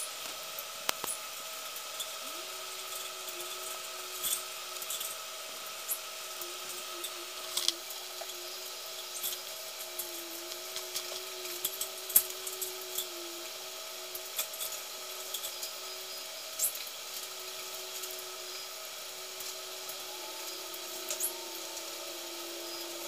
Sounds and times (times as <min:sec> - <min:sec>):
Insect: 0:00.0 - 0:23.0
Power tool: 0:00.0 - 0:23.0.